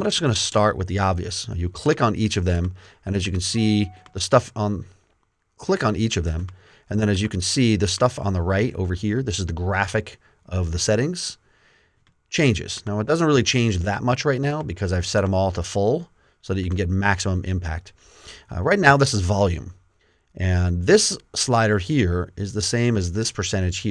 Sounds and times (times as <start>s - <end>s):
Speech: 0.0s - 4.9s, 5.6s - 11.4s, 12.3s - 19.8s, 20.4s - 23.9s.